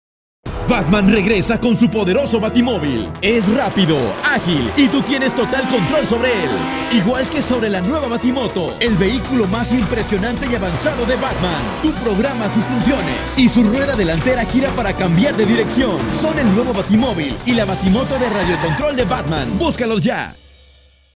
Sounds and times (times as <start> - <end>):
Music: 0.5 - 21.1
Speech: 0.6 - 20.4.